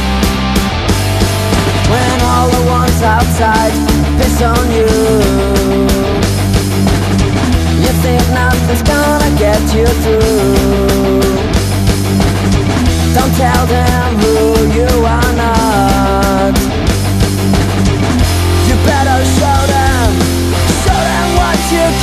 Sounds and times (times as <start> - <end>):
Funk: 0.0 - 22.0
Pop music: 1.8 - 6.2, 7.8 - 11.5, 13.1 - 16.7, 18.4 - 22.0.